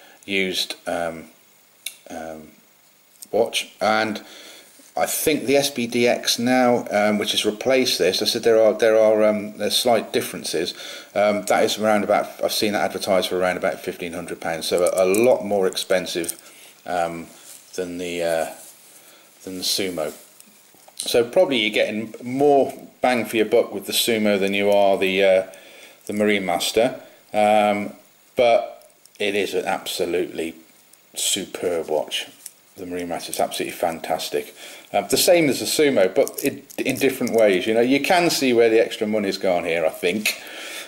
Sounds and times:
Inside, small room: 0.0s - 40.8s
Speech: 0.2s - 2.6s, 3.2s - 4.3s, 5.0s - 18.6s, 19.4s - 20.2s, 21.0s - 30.6s, 31.2s - 40.4s.

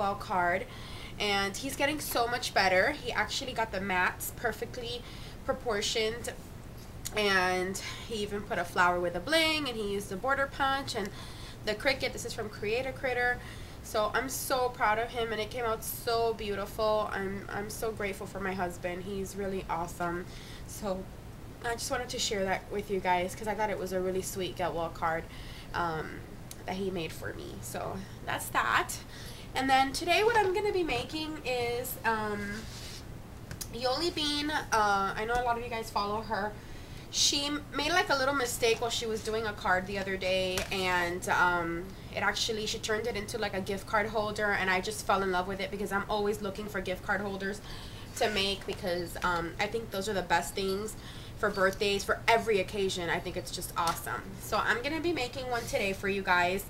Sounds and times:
Speech: 0.0s - 6.4s, 7.1s - 11.1s, 11.7s - 29.0s, 29.6s - 32.7s, 33.6s - 56.7s.

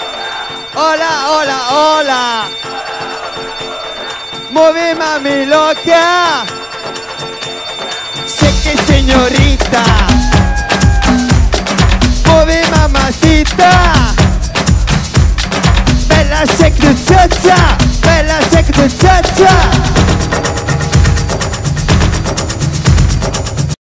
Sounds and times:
Music: 0.0s - 23.8s.

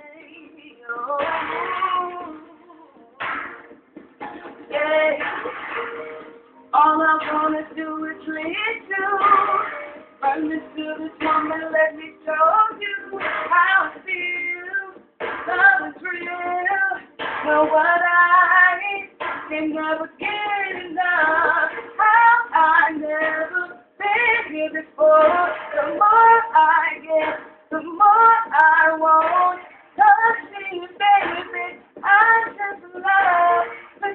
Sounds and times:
Female singing: 0.0s - 3.4s, 4.7s - 5.4s, 6.8s - 34.1s
Music: 0.0s - 34.1s.

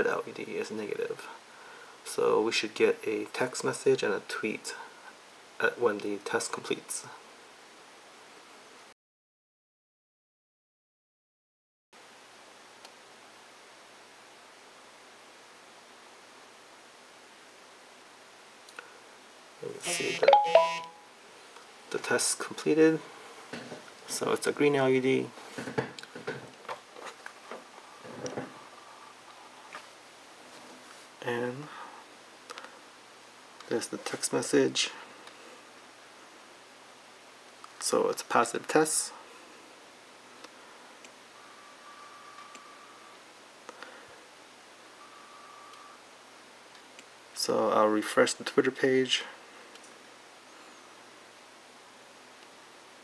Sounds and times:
Telephone: 19.9s - 21.0s.

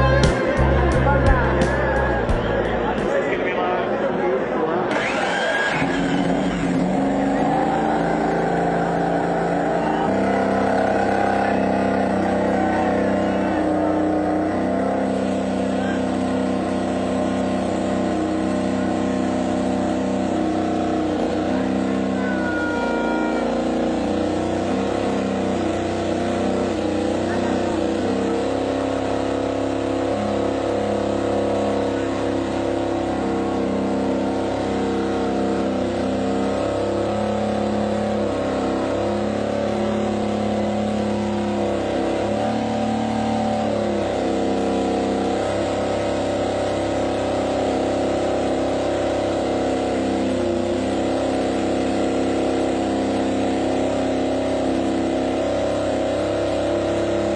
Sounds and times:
Vehicle: 0.0s - 57.3s
Accelerating, revving, vroom: 4.9s - 57.3s.

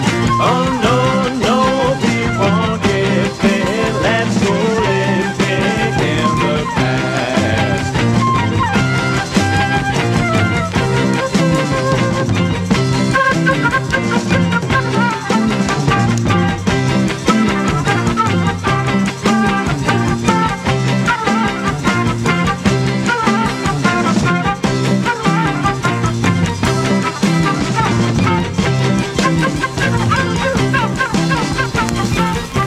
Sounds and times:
Music: 0.0s - 32.6s.

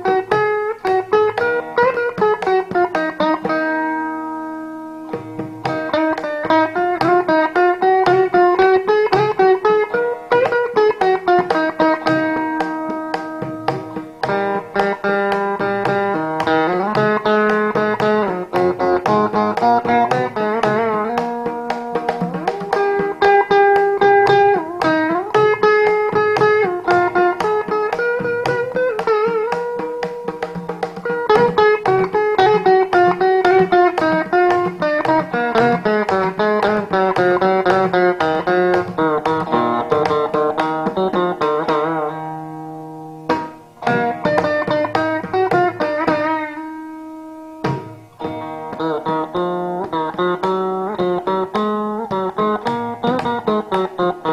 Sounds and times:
Carnatic music: 0.0s - 54.3s
Plucked string instrument: 0.0s - 54.3s.

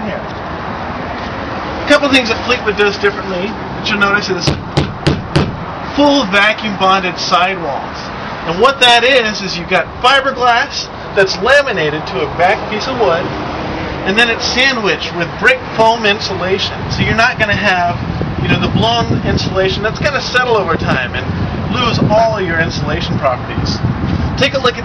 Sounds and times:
Speech: 0.0s - 0.3s, 1.9s - 4.5s, 6.0s - 13.3s, 14.0s - 23.8s, 24.4s - 24.8s
Vehicle: 0.0s - 24.8s.

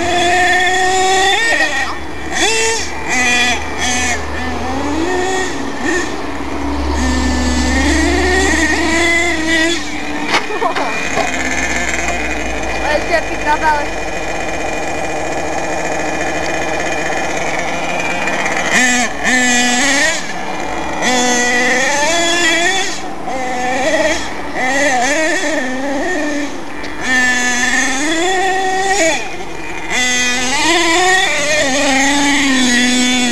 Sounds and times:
Car: 0.0s - 33.3s
Speech: 12.8s - 13.9s.

